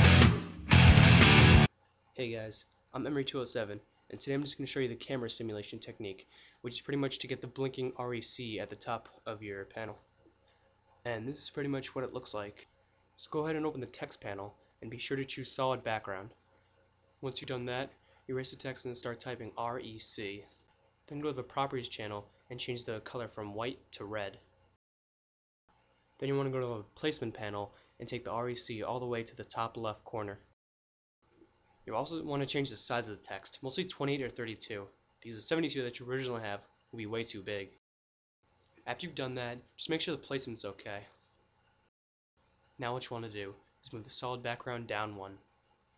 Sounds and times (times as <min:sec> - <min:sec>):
Speech: 0:02.2 - 0:10.0, 0:11.0 - 0:16.4, 0:17.2 - 0:24.5, 0:26.2 - 0:30.5, 0:31.9 - 0:37.8, 0:38.9 - 0:41.2, 0:42.8 - 0:45.4.